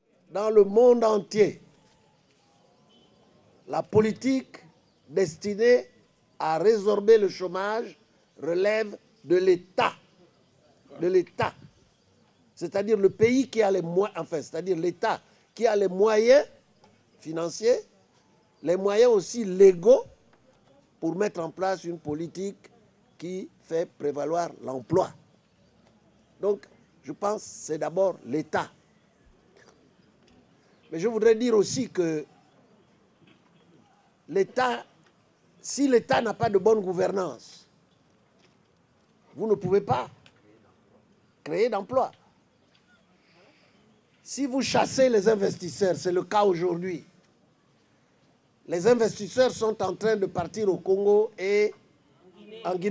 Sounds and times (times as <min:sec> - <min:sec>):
Speech: 0:00.3 - 0:01.6, 0:03.7 - 0:10.0, 0:10.8 - 0:11.7, 0:12.6 - 0:16.6, 0:17.2 - 0:17.9, 0:18.6 - 0:25.2, 0:26.4 - 0:28.8, 0:30.9 - 0:32.3, 0:34.3 - 0:34.9, 0:35.6 - 0:37.7, 0:39.3 - 0:42.2, 0:44.2 - 0:47.1, 0:48.7 - 0:52.9.